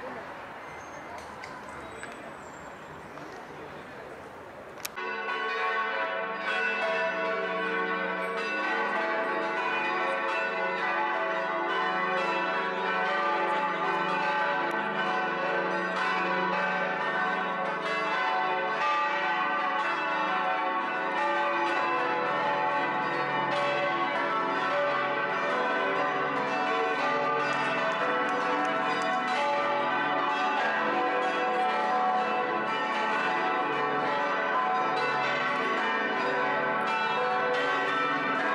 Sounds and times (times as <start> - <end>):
Change ringing (campanology): 4.9 - 38.5.